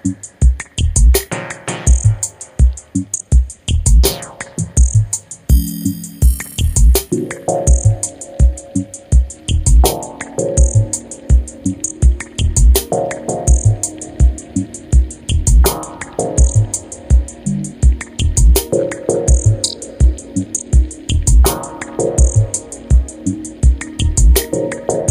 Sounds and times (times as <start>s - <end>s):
Music: 0.0s - 25.1s.